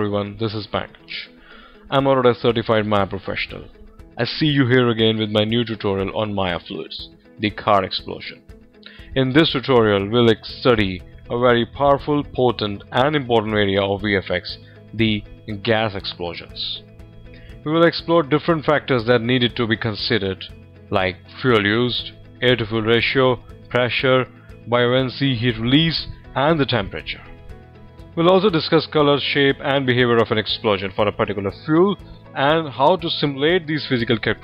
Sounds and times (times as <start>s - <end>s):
Speech: 0.0s - 1.3s, 1.9s - 8.4s, 9.2s - 16.8s, 17.6s - 27.3s, 28.2s - 34.4s
Music: 0.0s - 34.4s.